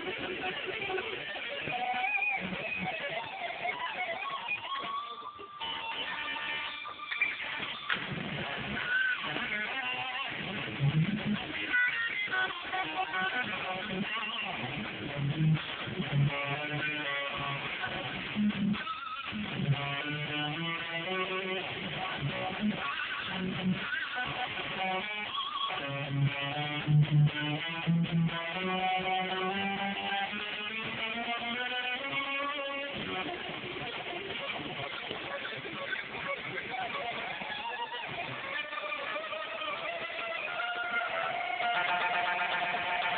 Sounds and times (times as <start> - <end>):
Electric guitar: 0.0 - 43.1.